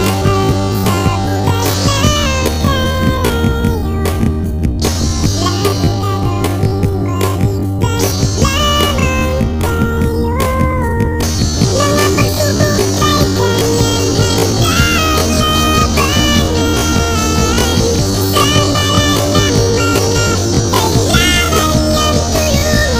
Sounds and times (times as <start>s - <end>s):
Music: 0.0s - 23.0s.